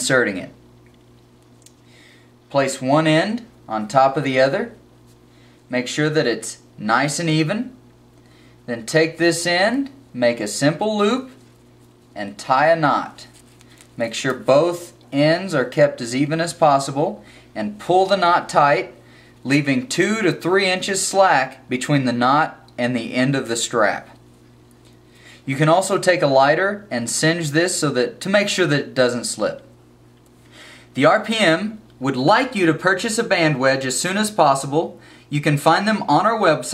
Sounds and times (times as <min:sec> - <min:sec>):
Speech: 0:00.0 - 0:00.6, 0:02.5 - 0:04.8, 0:05.7 - 0:07.8, 0:08.7 - 0:11.4, 0:12.2 - 0:13.3, 0:14.0 - 0:24.2, 0:25.5 - 0:29.7, 0:31.0 - 0:36.7.